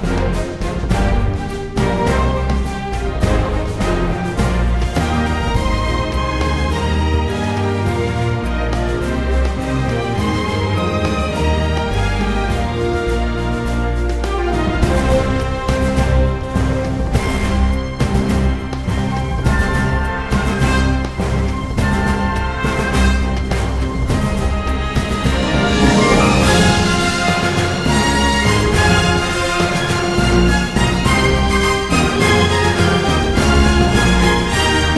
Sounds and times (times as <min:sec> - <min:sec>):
Music: 0:00.0 - 0:34.9.